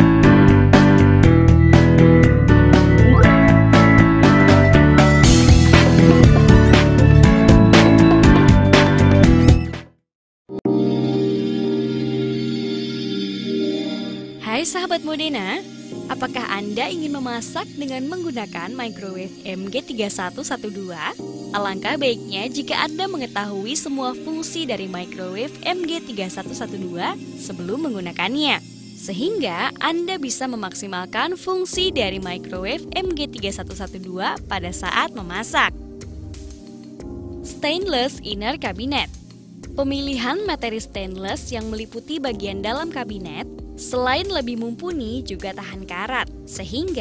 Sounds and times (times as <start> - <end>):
Music: 0.0 - 47.0
Speech: 14.4 - 35.7, 37.5 - 39.1, 39.8 - 47.0.